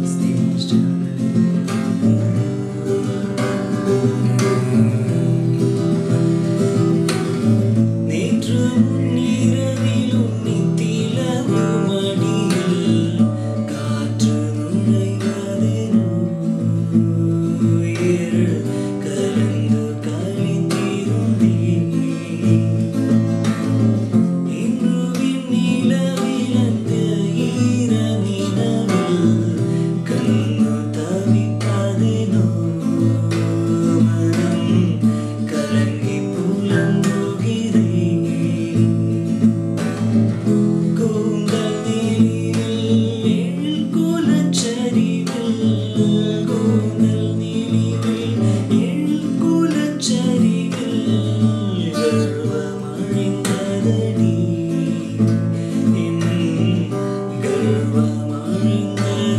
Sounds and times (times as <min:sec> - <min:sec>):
Acoustic guitar: 0:00.0 - 0:59.3
Singing: 0:08.1 - 0:23.6, 0:24.5 - 0:39.4, 0:40.8 - 0:59.3.